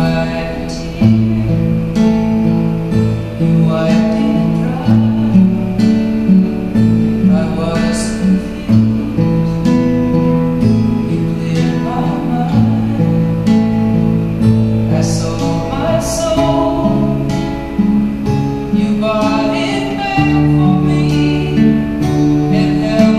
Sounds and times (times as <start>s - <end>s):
Acoustic guitar: 0.0s - 23.1s.